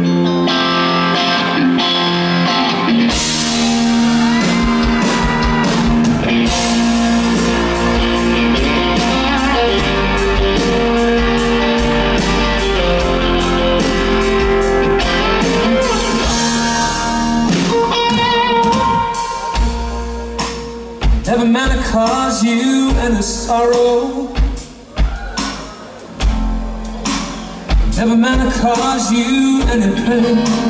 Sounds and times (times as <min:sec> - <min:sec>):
Music: 0:00.0 - 0:30.6.